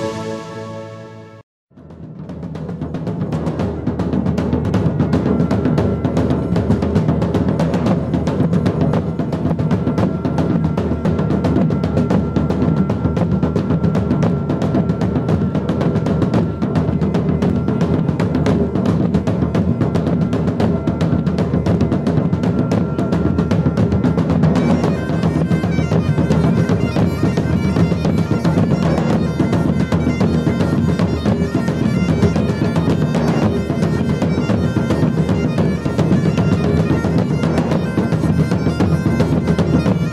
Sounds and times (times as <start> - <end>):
Music: 0.0 - 40.1.